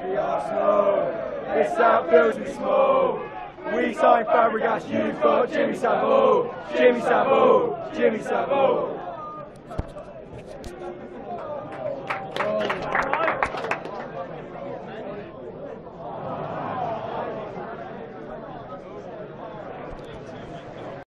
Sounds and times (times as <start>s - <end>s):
Speech: 0.0s - 21.1s.